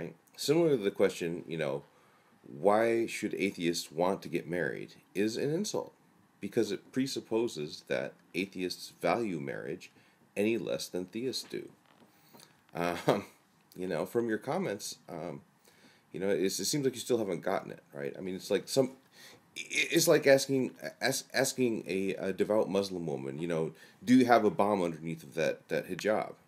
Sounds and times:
Male speech, man speaking: 0.0s - 1.9s, 2.5s - 11.8s, 12.8s - 15.4s, 16.2s - 19.0s, 19.6s - 26.4s.

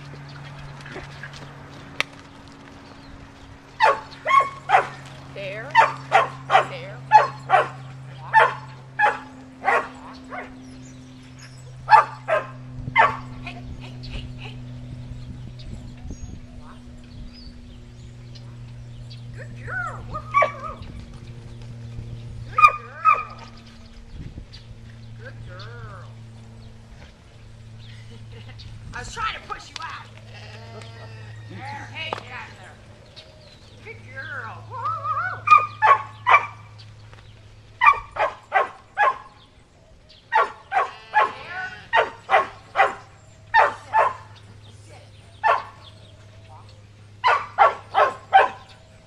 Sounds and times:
Canidae, dogs, wolves: 3.7s - 13.4s, 19.6s - 21.4s, 22.5s - 23.9s, 34.6s - 49.0s
Yip: 20.0s - 20.8s, 34.8s - 36.6s, 37.8s - 39.3s, 40.3s - 44.3s, 45.4s - 45.8s, 47.2s - 48.7s
Sheep: 30.1s - 32.3s, 40.4s - 42.2s
Bow-wow: 35.0s - 36.6s, 37.8s - 39.3s, 40.3s - 43.0s, 47.2s - 48.7s.

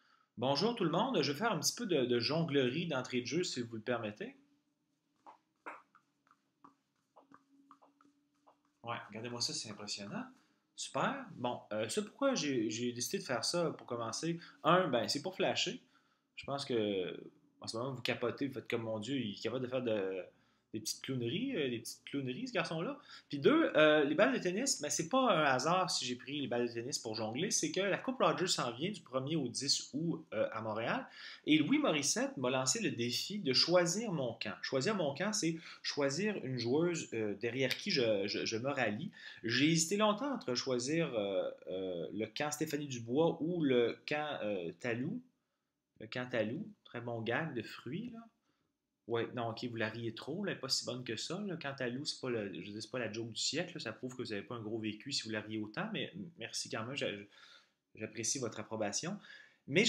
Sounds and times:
Speech: 0.4s - 4.4s, 8.9s - 45.3s, 46.0s - 48.3s, 49.1s - 57.3s, 58.0s - 59.8s.

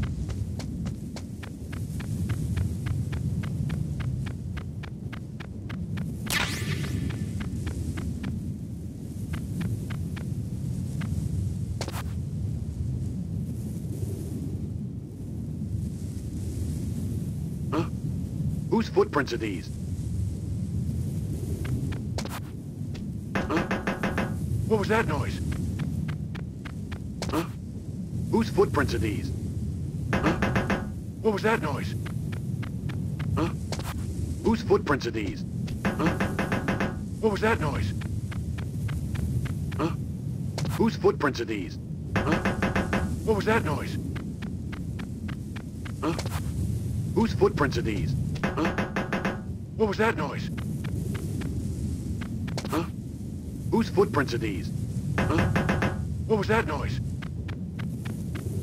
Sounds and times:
Speech: 17.8s - 18.0s, 18.7s - 19.7s, 24.7s - 25.5s, 28.3s - 29.4s, 31.2s - 32.0s, 33.4s - 33.6s, 34.4s - 35.4s, 37.2s - 38.0s, 40.8s - 42.4s, 43.2s - 44.0s, 47.2s - 48.7s, 49.8s - 50.5s, 52.7s - 52.9s, 53.7s - 55.5s, 56.3s - 57.0s.

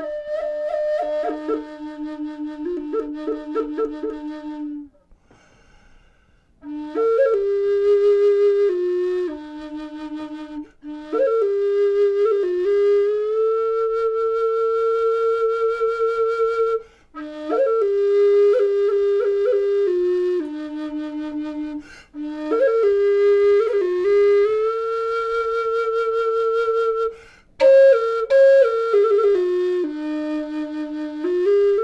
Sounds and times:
Wind instrument, woodwind instrument: 0.0s - 5.1s, 6.5s - 31.8s.

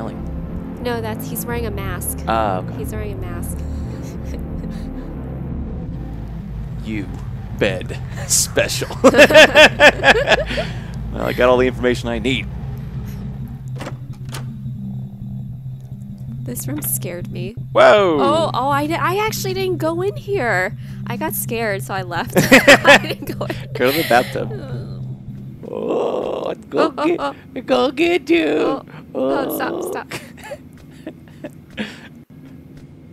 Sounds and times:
Music: 0.0s - 28.1s
Speech: 0.8s - 3.7s, 6.8s - 9.0s, 11.2s - 12.5s, 16.5s - 22.4s, 23.0s - 25.0s, 25.7s - 30.2s.

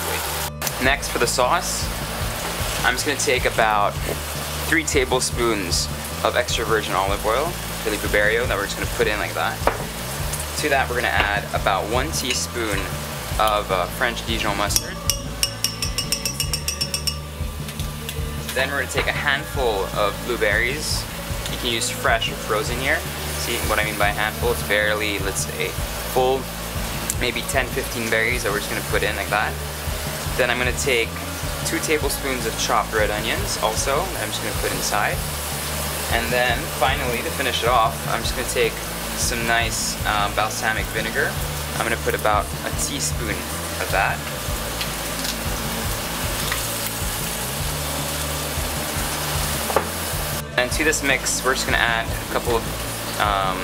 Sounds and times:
Speech: 0.0s - 1.9s, 2.8s - 9.6s, 10.6s - 15.0s, 18.5s - 26.5s, 27.1s - 29.6s, 30.4s - 35.2s, 36.1s - 44.3s, 50.5s - 53.6s
Music: 0.0s - 53.6s.

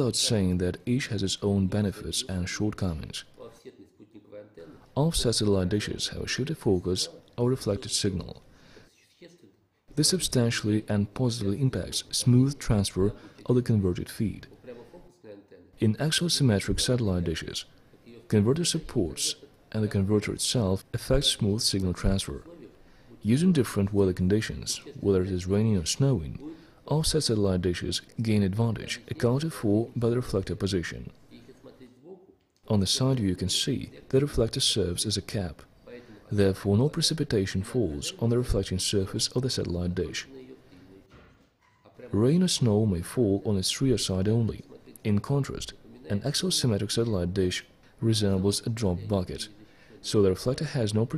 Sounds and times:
Speech: 0.0s - 41.3s, 41.9s - 51.1s.

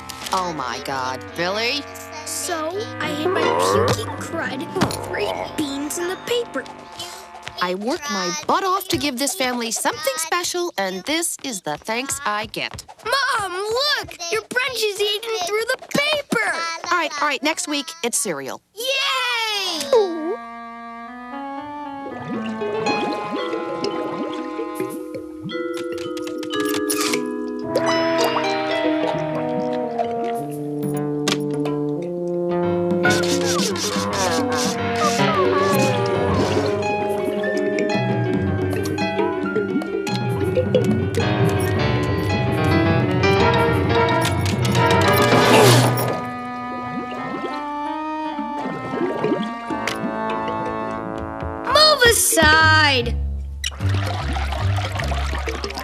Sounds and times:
Brass instrument: 0.0s - 8.1s, 20.3s - 25.2s, 27.0s - 39.4s, 41.4s - 51.8s.

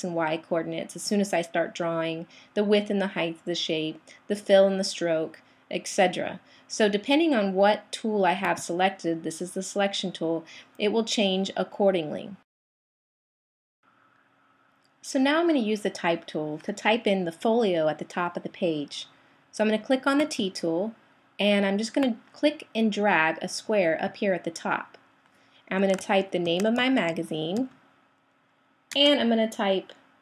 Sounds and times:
Speech: 0.0s - 12.4s, 15.1s - 25.0s, 25.7s - 27.7s, 29.0s - 30.0s.

